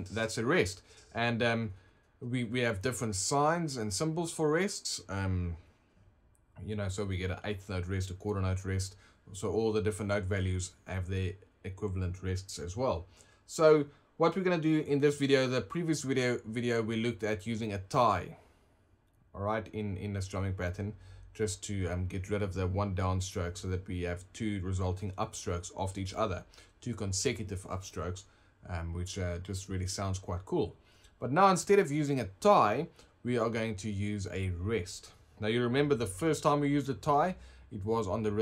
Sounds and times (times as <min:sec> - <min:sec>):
Speech: 0:00.0 - 0:05.7, 0:06.6 - 0:18.4, 0:19.3 - 0:38.4.